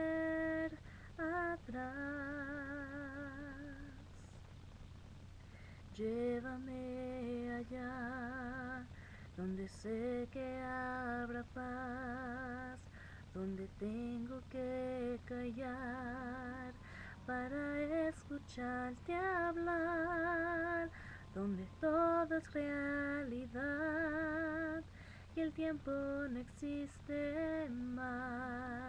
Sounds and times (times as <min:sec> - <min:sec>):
Female singing: 0:00.0 - 0:04.1, 0:05.9 - 0:12.8, 0:13.4 - 0:28.8.